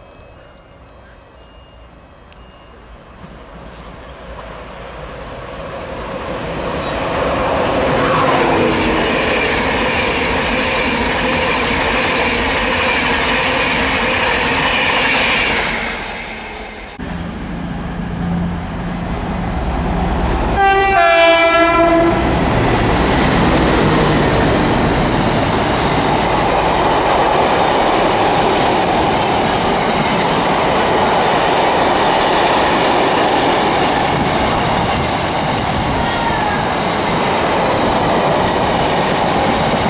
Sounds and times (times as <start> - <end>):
Railroad car, train wagon: 0.0 - 39.8
Subway, metro, underground: 0.0 - 39.8
Train horn: 20.5 - 22.4.